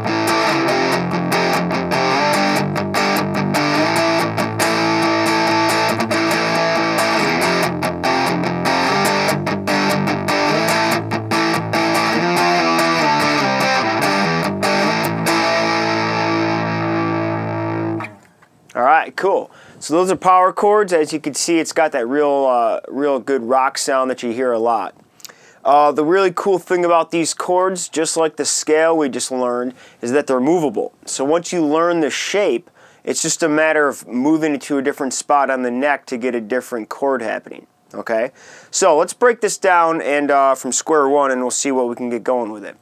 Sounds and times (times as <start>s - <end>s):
Strum: 0.0s - 18.3s.